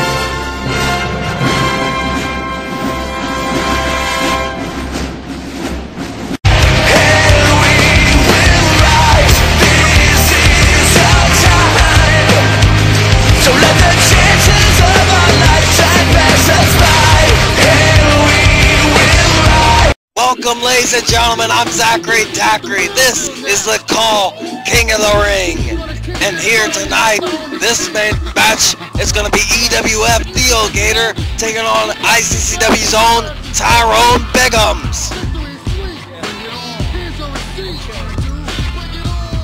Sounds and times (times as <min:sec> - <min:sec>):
Music: 0:00.0 - 0:39.4
Speech: 0:20.2 - 0:39.4.